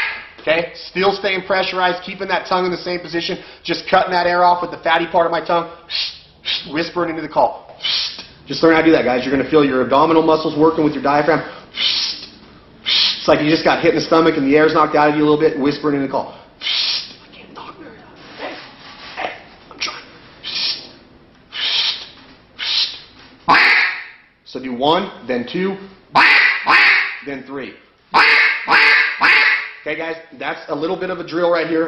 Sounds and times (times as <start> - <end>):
Quack: 0.0 - 0.3, 23.5 - 24.1, 26.2 - 27.2, 28.2 - 29.8
Speech: 0.4 - 5.7, 6.7 - 7.6, 8.5 - 11.5, 13.2 - 16.3, 27.2 - 27.8, 29.9 - 31.8.